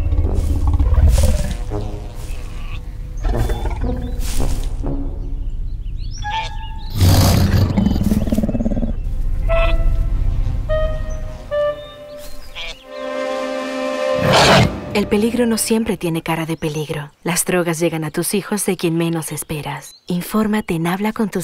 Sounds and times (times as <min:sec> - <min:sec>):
Speech: 0:14.9 - 0:21.4.